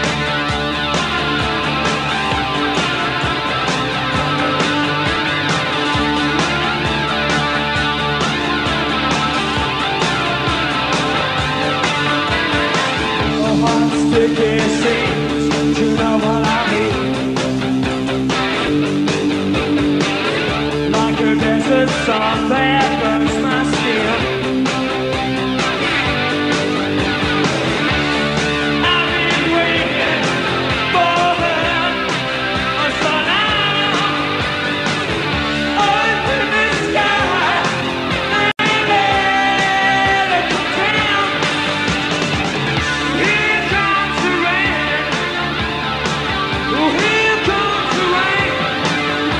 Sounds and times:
Music: 0.0 - 49.3.

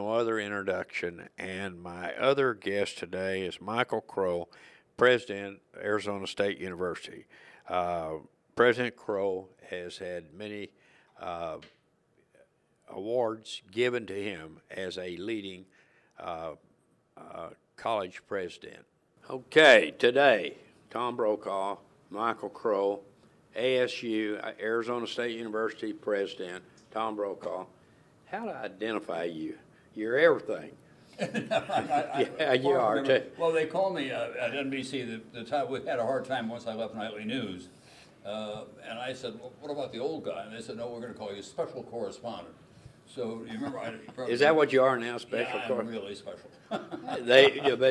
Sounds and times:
Speech: 0.0 - 11.6, 12.9 - 15.6, 16.2 - 16.6, 17.2 - 27.7, 28.3 - 30.8, 32.0 - 46.5, 47.1 - 47.9.

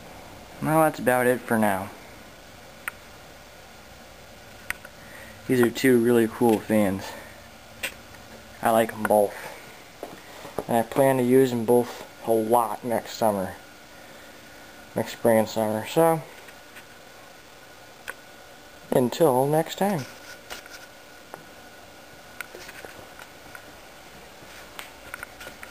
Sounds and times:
Mechanical fan: 0.0 - 25.7
Speech: 0.6 - 2.0, 5.5 - 7.3, 8.6 - 9.5, 10.7 - 13.6, 15.0 - 16.4, 18.9 - 20.2.

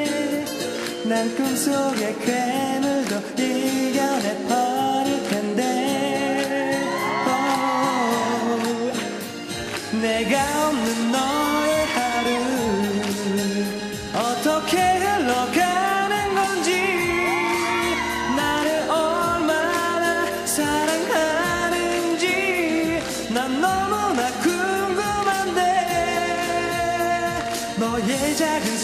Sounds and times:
Male singing: 0.0 - 9.3, 9.9 - 28.8
Music: 0.0 - 28.8.

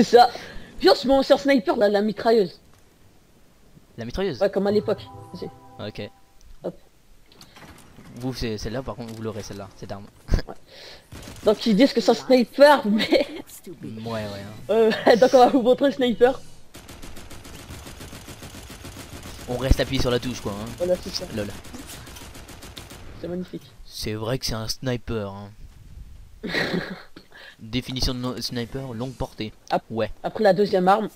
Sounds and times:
Fusillade: 11.1 - 12.0, 16.7 - 23.4.

